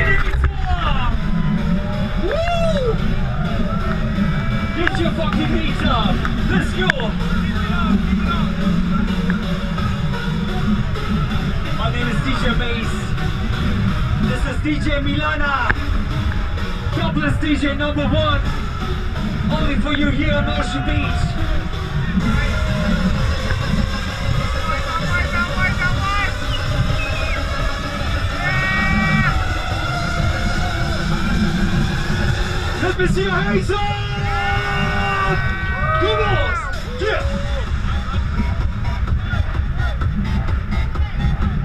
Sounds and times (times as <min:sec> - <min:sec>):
Music: 0:00.0 - 0:41.6.